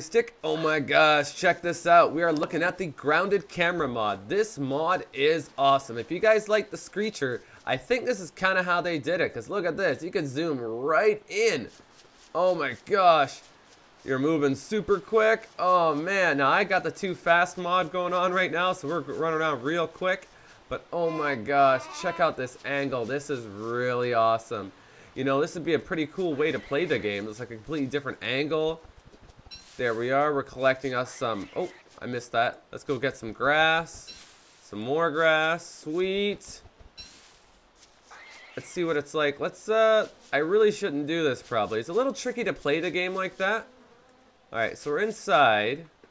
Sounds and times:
Speech: 0:00.0 - 0:11.7, 0:12.3 - 0:13.5, 0:14.1 - 0:28.8, 0:29.8 - 0:34.1, 0:34.7 - 0:36.7, 0:38.6 - 0:43.7, 0:44.6 - 0:46.0.

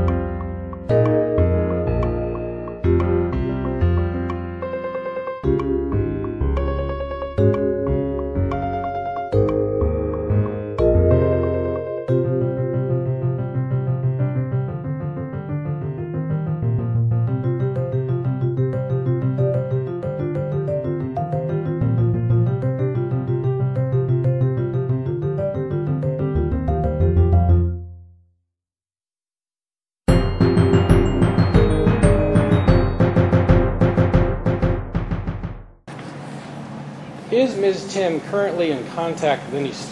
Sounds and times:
Music: 0:00.0 - 0:28.3, 0:30.1 - 0:35.8.

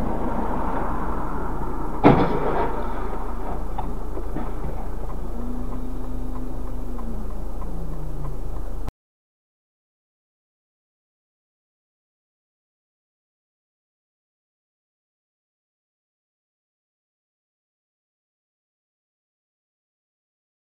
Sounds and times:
Vehicle: 0:00.0 - 0:08.9.

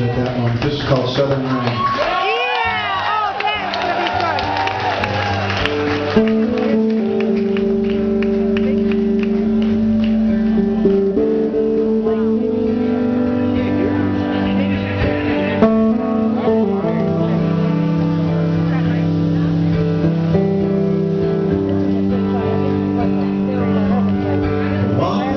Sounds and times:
Music: 0:00.0 - 0:25.3.

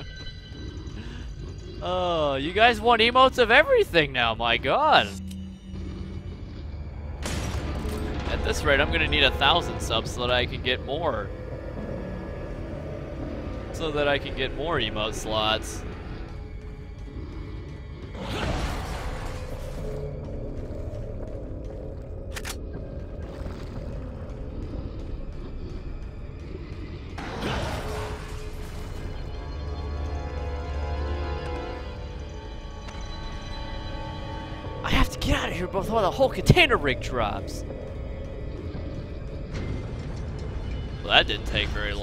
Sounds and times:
Music: 0:00.0 - 0:42.0
Speech: 0:01.8 - 0:05.2, 0:13.8 - 0:15.8, 0:34.9 - 0:37.6, 0:41.0 - 0:42.0.

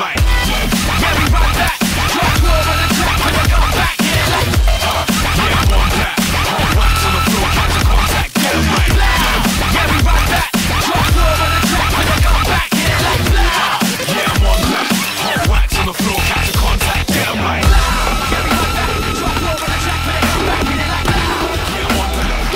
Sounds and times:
Dubstep: 0:00.0 - 0:22.5.

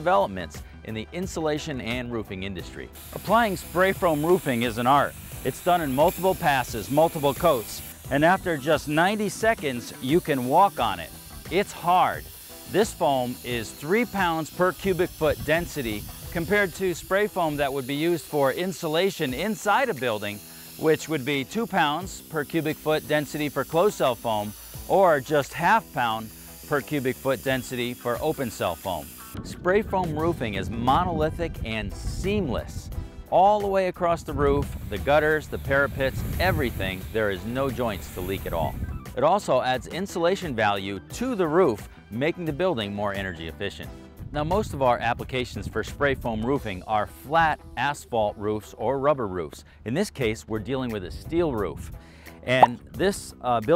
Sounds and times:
Music: 0:00.0 - 0:53.7
Speech: 0:00.0 - 0:53.7
Spray: 0:02.9 - 0:29.4, 0:34.6 - 0:38.8.

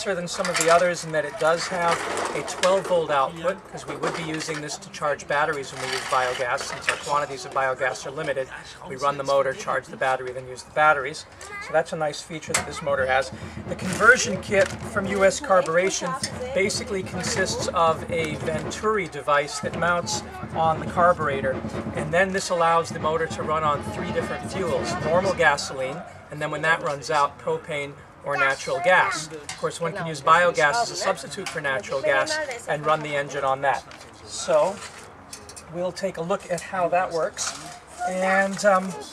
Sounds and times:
Speech: 0:00.0 - 0:34.9, 0:35.7 - 0:39.1.

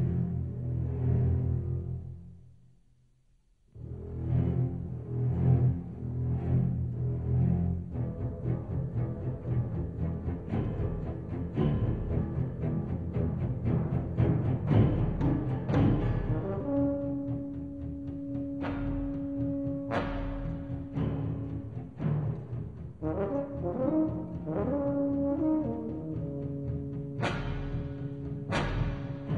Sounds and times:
Music: 0:00.0 - 0:29.3.

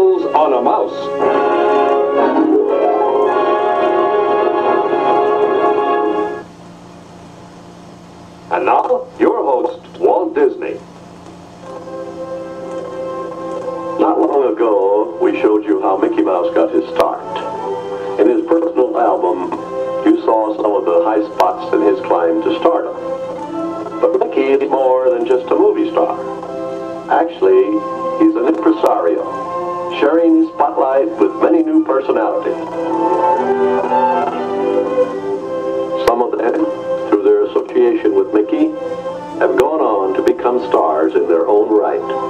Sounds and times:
Speech: 0:00.0 - 0:01.1, 0:08.5 - 0:10.8, 0:14.0 - 0:17.5, 0:18.2 - 0:23.0, 0:24.0 - 0:26.2, 0:27.1 - 0:29.3, 0:29.9 - 0:32.7, 0:36.0 - 0:38.8, 0:39.4 - 0:42.2
Music: 0:00.0 - 0:42.2.

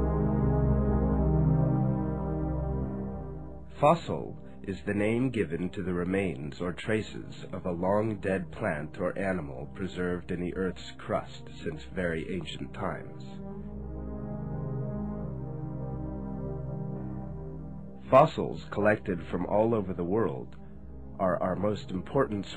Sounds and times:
Music: 0:00.0 - 0:22.5
Speech: 0:03.8 - 0:13.4, 0:18.1 - 0:20.6, 0:21.2 - 0:22.5.

